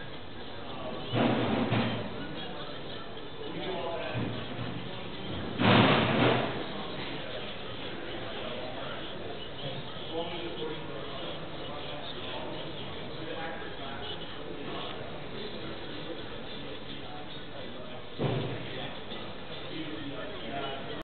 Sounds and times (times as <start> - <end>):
Speech: 0.0 - 21.0.